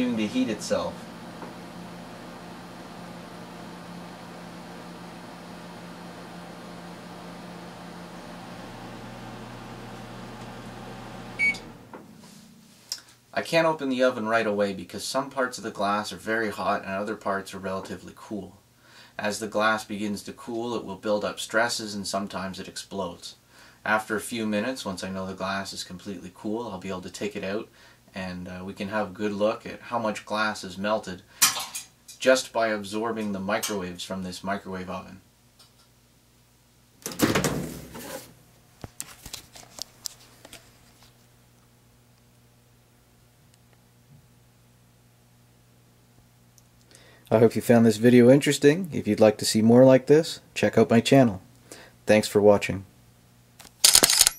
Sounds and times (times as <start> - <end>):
Speech: 0.0 - 1.0, 13.4 - 18.6, 19.2 - 31.3, 32.2 - 35.2, 47.3 - 51.5, 52.1 - 52.9
Inside, small room: 0.0 - 54.3.